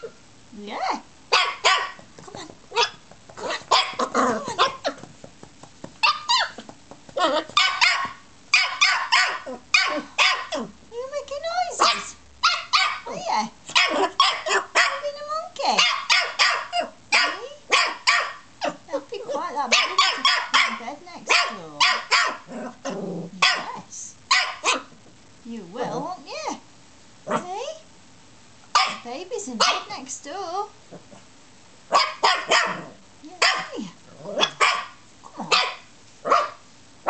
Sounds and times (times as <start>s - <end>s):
Speech: 0.5s - 1.1s, 2.2s - 2.6s, 10.9s - 12.2s, 13.1s - 14.1s, 14.9s - 16.0s, 17.2s - 17.7s, 18.9s - 22.0s, 23.3s - 24.2s, 25.4s - 26.6s, 27.3s - 27.9s, 28.9s - 30.8s, 33.2s - 34.0s
Bark: 1.3s - 2.0s, 3.7s - 5.0s, 6.0s - 6.6s, 7.6s - 10.6s, 11.8s - 15.1s, 15.8s - 18.8s, 19.7s - 22.5s, 23.4s - 24.9s, 28.7s - 29.9s, 31.9s - 33.8s, 34.4s - 37.0s.